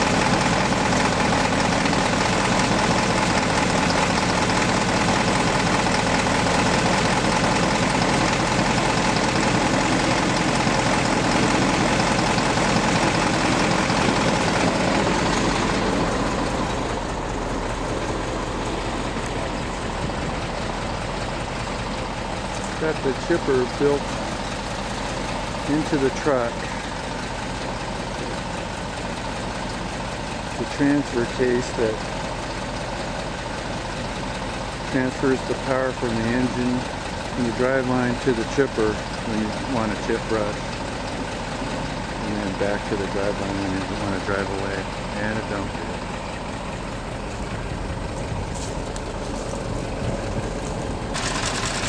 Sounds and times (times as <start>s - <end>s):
Truck: 0.0s - 51.8s
Speech: 22.8s - 24.0s, 25.7s - 26.7s, 30.6s - 32.0s, 34.9s - 40.6s, 42.2s - 46.0s.